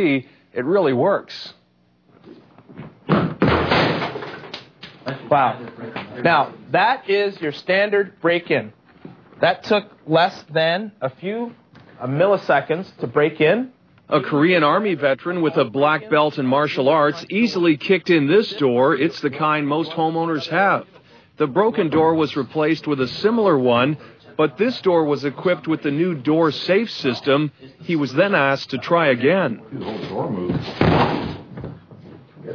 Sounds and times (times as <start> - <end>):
Slam: 3.1 - 4.2, 30.8 - 31.5
Speech: 9.4 - 30.6.